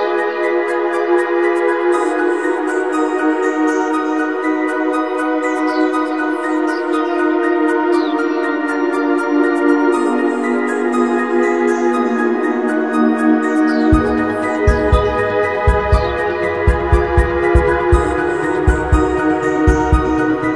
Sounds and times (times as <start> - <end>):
Music: 0.0 - 20.5.